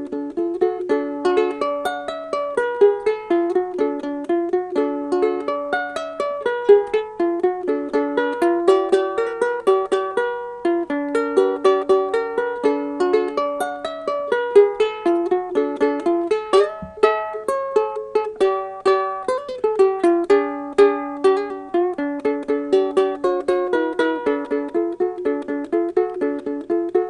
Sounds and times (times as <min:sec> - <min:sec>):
Music: 0:00.0 - 0:27.0.